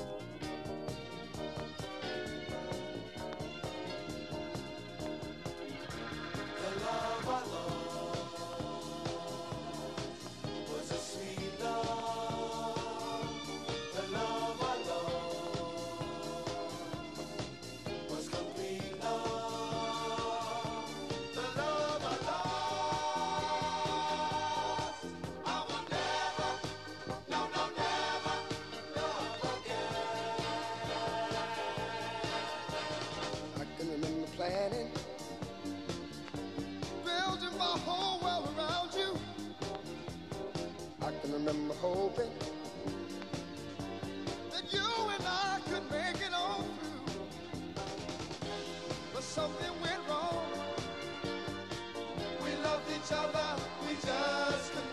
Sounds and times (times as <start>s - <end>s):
Music: 0.0s - 54.9s.